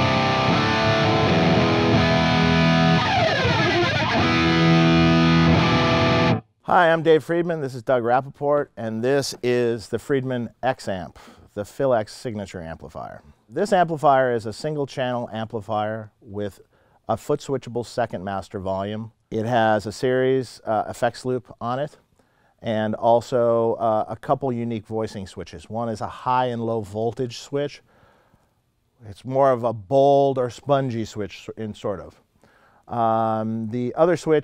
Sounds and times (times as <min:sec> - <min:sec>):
Speech: 0:06.7 - 0:22.0, 0:22.6 - 0:27.8, 0:29.0 - 0:32.2, 0:32.9 - 0:34.4.